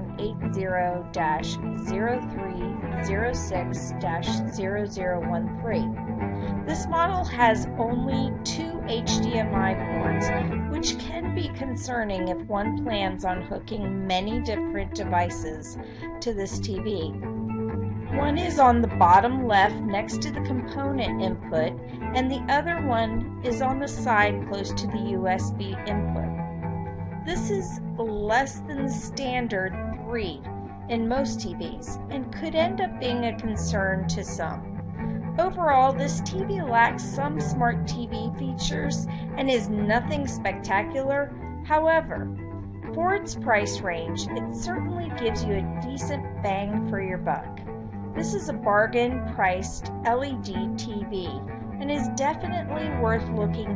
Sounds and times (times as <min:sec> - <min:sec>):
Narration, monologue: 0:00.0 - 0:53.7.